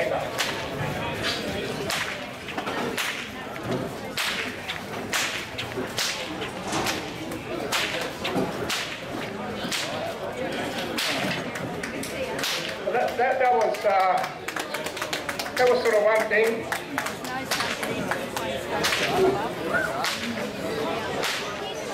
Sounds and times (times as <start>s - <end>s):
Whip: 0.3s - 3.4s, 4.1s - 10.1s, 10.9s - 11.5s, 12.4s - 12.8s, 18.8s - 19.2s, 19.9s - 20.4s, 21.2s - 21.6s.